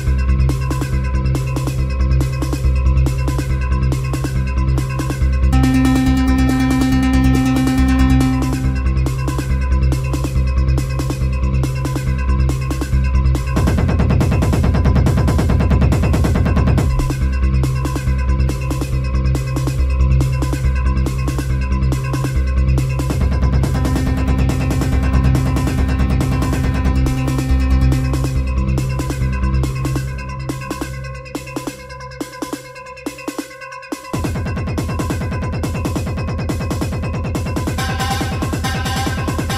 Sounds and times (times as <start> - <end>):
Drum machine: 5.6 - 9.3, 23.1 - 30.9, 34.2 - 39.5.